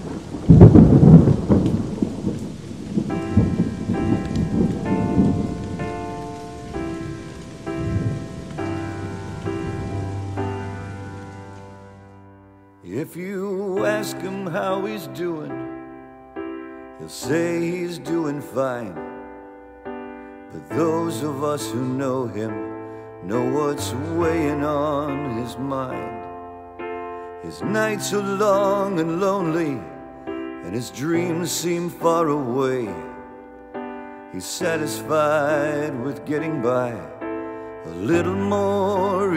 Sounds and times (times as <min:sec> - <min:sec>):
Music: 0:00.0 - 0:39.3.